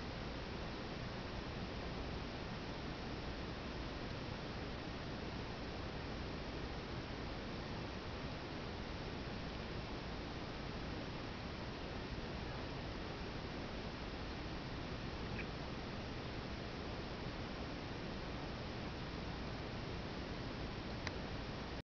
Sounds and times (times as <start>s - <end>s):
Mouse: 15.2s - 15.6s.